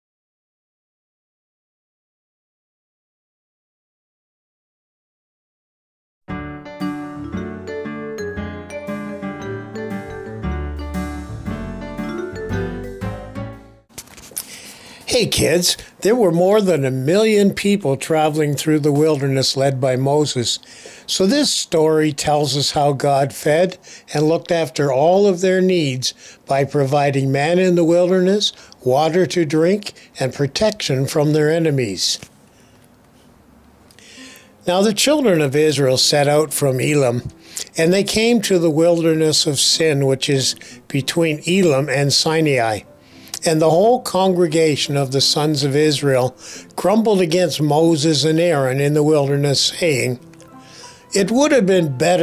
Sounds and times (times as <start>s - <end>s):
Music: 6.3s - 13.9s, 35.2s - 52.2s
Speech: 15.1s - 32.3s, 34.6s - 42.8s, 43.4s - 50.2s, 51.2s - 52.2s.